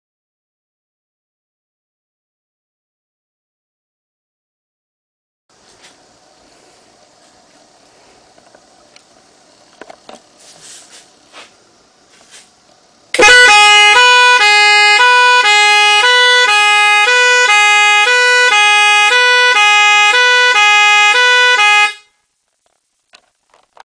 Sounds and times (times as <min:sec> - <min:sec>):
Siren: 0:13.2 - 0:22.1.